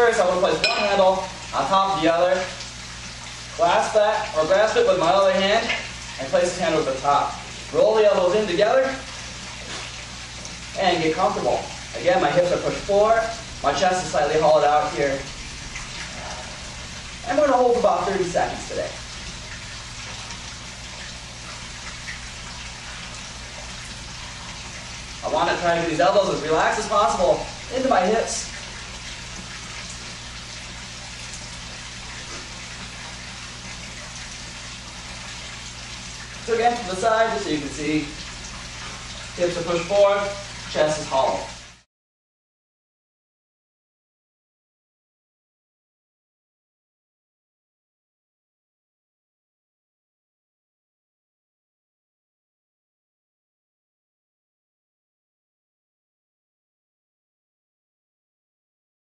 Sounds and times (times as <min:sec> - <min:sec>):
Water: 0:00.0 - 0:41.9.